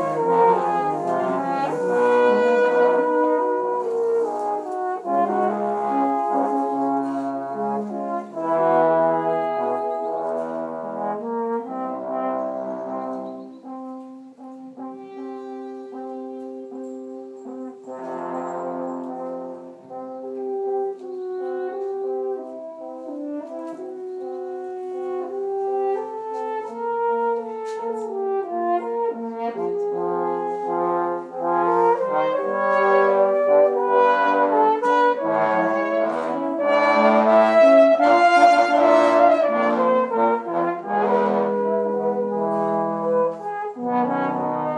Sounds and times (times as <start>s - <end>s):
French horn: 0.0s - 44.7s.